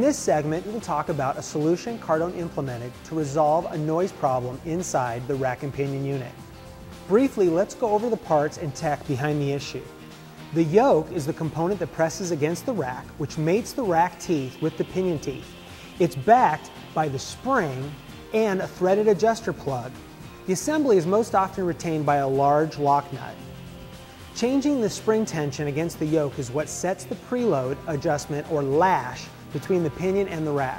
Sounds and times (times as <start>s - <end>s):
Speech: 0.0s - 6.4s, 7.1s - 9.9s, 10.6s - 23.4s, 24.4s - 30.7s
Music: 0.0s - 30.7s.